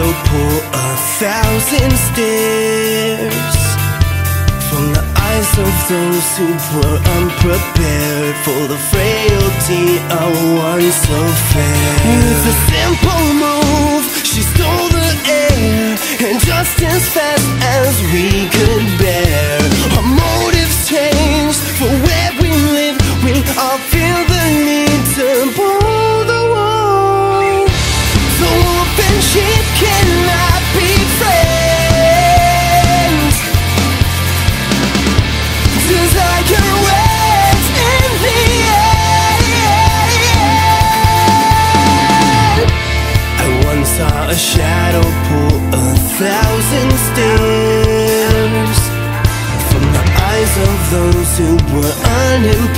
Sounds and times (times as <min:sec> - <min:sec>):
Sad music: 0:00.0 - 0:23.0, 0:25.8 - 0:52.3.